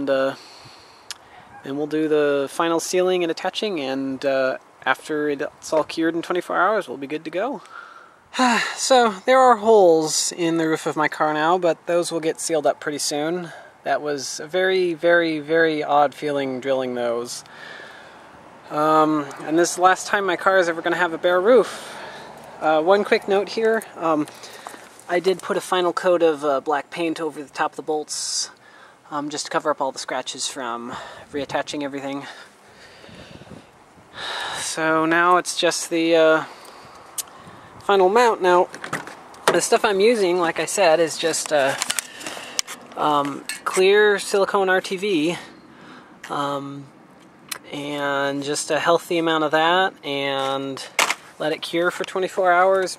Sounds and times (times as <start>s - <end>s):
Speech: 0.0s - 0.4s, 1.6s - 7.7s, 8.4s - 17.5s, 18.7s - 22.0s, 22.6s - 24.3s, 25.1s - 32.5s, 34.6s - 36.5s, 37.9s - 38.7s, 39.5s - 41.8s, 43.0s - 45.5s, 46.3s - 46.9s, 47.6s - 52.9s.